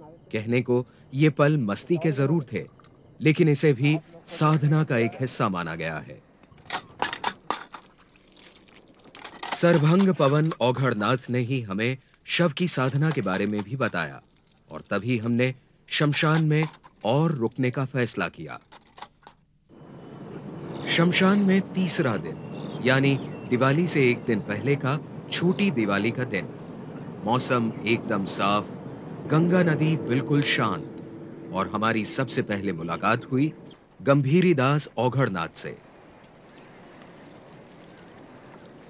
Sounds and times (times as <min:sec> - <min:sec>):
Speech: 0:00.0 - 0:06.2, 0:09.6 - 0:18.6, 0:20.8 - 0:26.5, 0:27.2 - 0:28.7, 0:29.3 - 0:30.9, 0:31.5 - 0:35.8
Outside, rural or natural: 0:00.0 - 0:38.8.